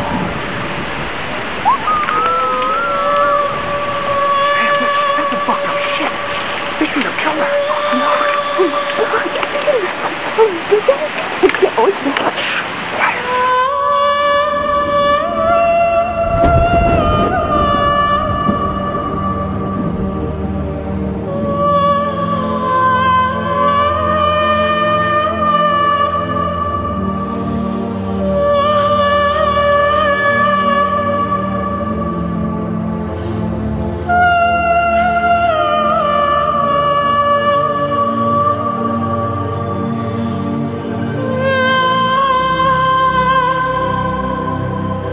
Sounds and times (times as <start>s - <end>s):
Music: 2.2s - 12.2s, 13.3s - 45.1s.